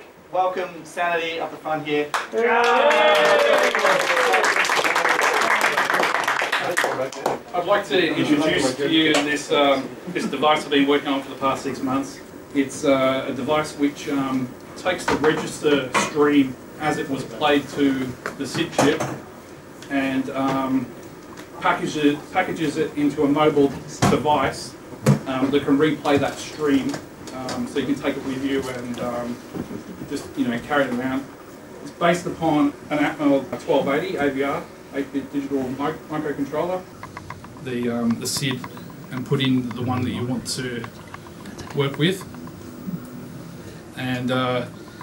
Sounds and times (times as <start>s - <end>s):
Speech: 0.3s - 4.5s, 6.6s - 19.2s, 19.8s - 20.9s, 21.6s - 29.4s, 30.1s - 36.9s, 37.6s - 40.9s, 41.6s - 42.3s, 44.0s - 44.8s.